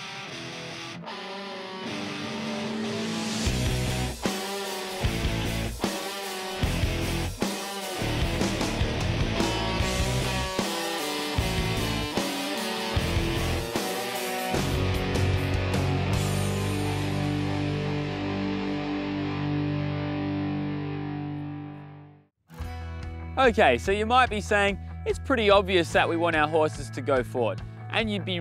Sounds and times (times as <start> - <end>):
Music: 0.0 - 28.4
Speech: 23.4 - 28.4.